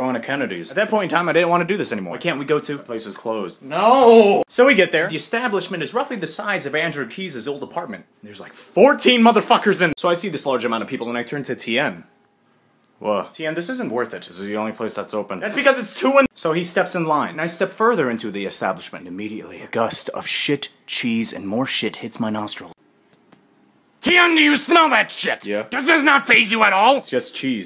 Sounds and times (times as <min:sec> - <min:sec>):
Speech: 0:00.0 - 0:12.1, 0:13.0 - 0:22.8, 0:24.0 - 0:27.6.